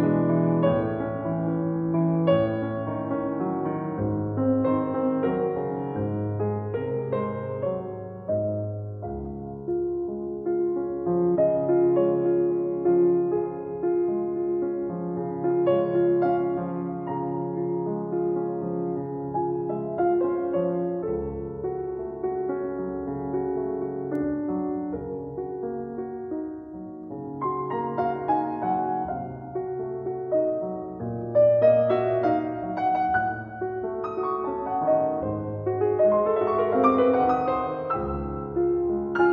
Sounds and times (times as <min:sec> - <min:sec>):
Music: 0:00.0 - 0:39.3.